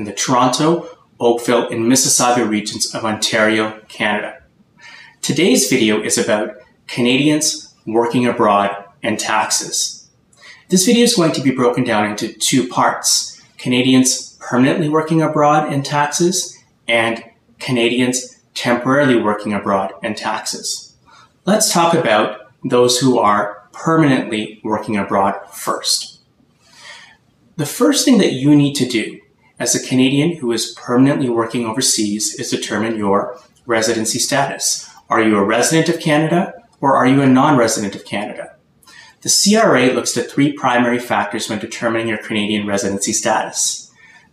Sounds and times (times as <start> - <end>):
Speech: 0.0 - 4.5, 5.2 - 26.2, 27.6 - 38.6, 39.2 - 43.9.